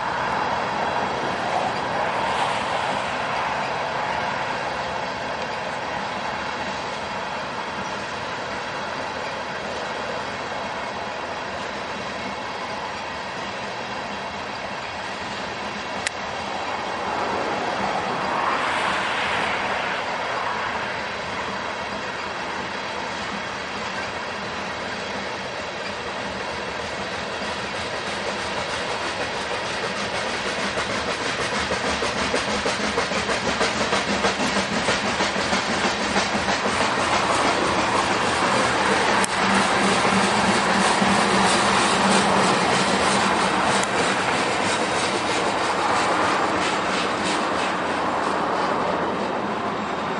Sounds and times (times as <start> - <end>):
Railroad car, train wagon: 0.0 - 50.1
Train: 0.0 - 50.1
Clickety-clack: 0.4 - 50.1.